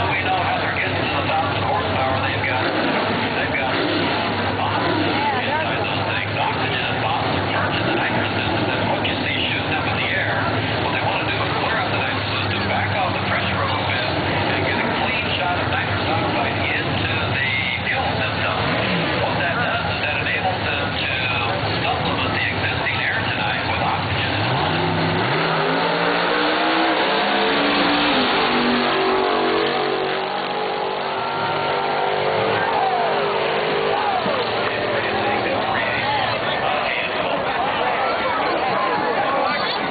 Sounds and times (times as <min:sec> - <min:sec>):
Speech: 0:00.0 - 0:24.8, 0:33.8 - 0:39.9
Race car, auto racing: 0:00.0 - 0:39.9.